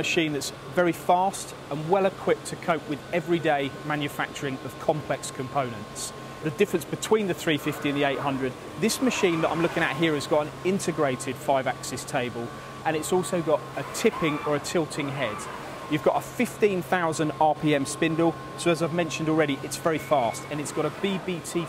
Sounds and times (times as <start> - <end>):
Speech: 0.0 - 21.6.